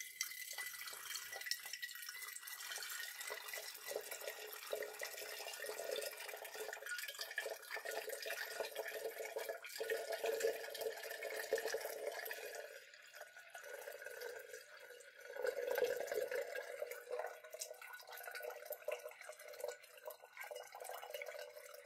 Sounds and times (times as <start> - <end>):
Toilet flush: 0.0 - 21.8
Water tap, faucet: 0.0 - 21.8.